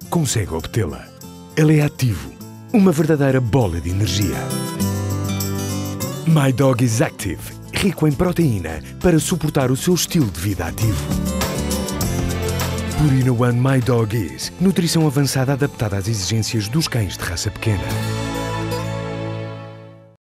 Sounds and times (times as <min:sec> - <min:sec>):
Speech: 0:00.0 - 0:04.6, 0:06.3 - 0:11.1, 0:13.0 - 0:18.0
Music: 0:00.0 - 0:20.2.